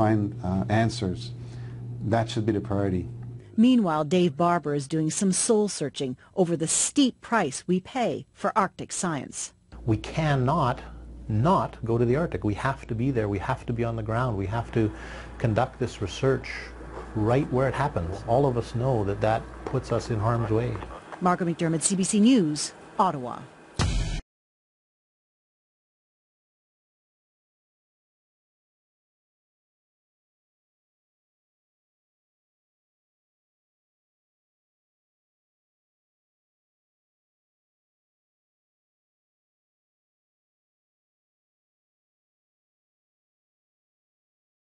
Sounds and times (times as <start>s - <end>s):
Speech: 0.0s - 1.3s, 2.0s - 23.5s.